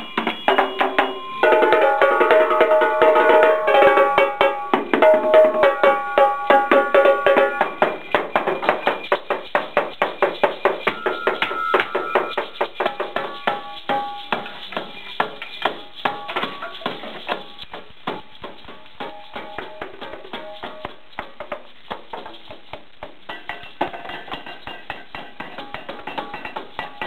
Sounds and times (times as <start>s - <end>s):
Wood block: 0.0s - 27.0s.